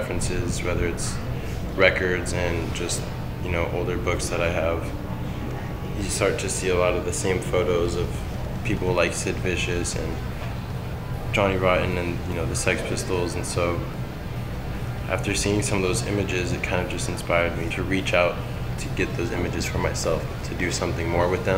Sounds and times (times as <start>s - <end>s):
Speech: 0.0s - 1.2s, 1.8s - 4.9s, 5.9s - 10.2s, 11.3s - 14.0s, 15.1s - 21.5s.